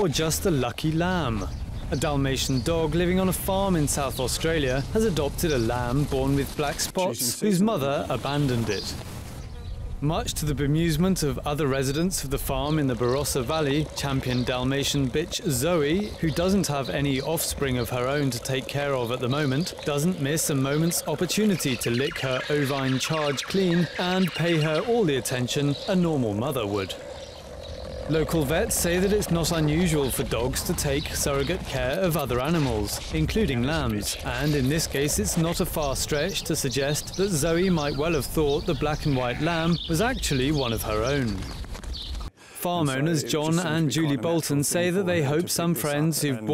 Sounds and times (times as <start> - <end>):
Speech: 0.0 - 9.0, 10.0 - 27.0, 28.1 - 41.5, 42.6 - 46.5
Animal: 11.7 - 42.3.